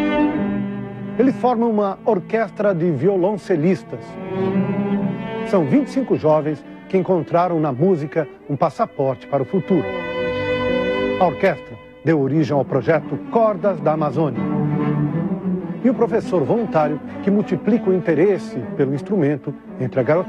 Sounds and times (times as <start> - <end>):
Cello: 0.0 - 20.2
Classical music: 0.0 - 20.2
Speech: 1.2 - 4.2, 5.5 - 9.9, 11.2 - 14.4, 15.8 - 20.2.